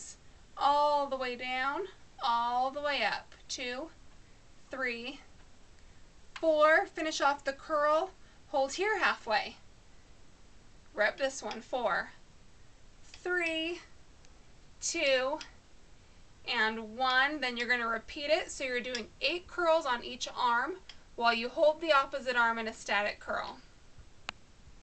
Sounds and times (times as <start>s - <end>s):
Speech: 0.0s - 4.0s, 4.7s - 5.3s, 6.4s - 9.6s, 11.0s - 12.2s, 13.2s - 13.9s, 14.8s - 15.5s, 16.5s - 23.7s.